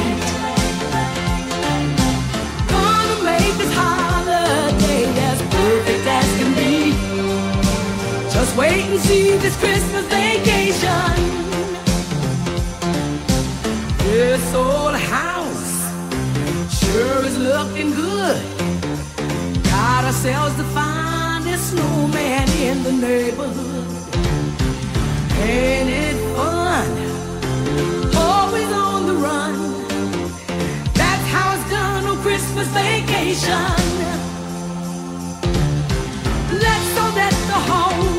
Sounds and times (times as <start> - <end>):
Jingle (music): 0.0 - 38.1.